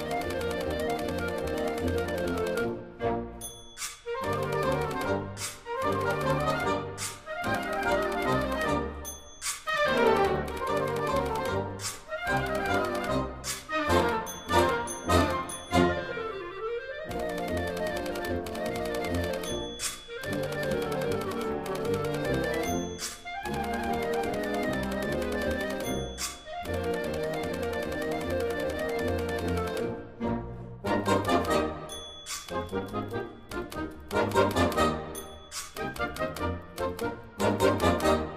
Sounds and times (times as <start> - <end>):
Orchestra: 0.0 - 38.3.